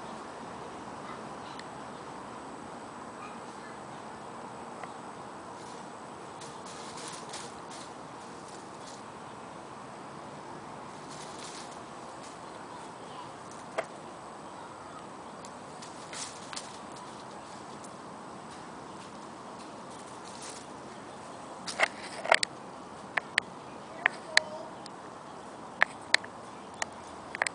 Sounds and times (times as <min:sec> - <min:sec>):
Speech: 0:03.2 - 0:04.4, 0:12.5 - 0:13.5, 0:14.4 - 0:15.2, 0:23.7 - 0:24.8.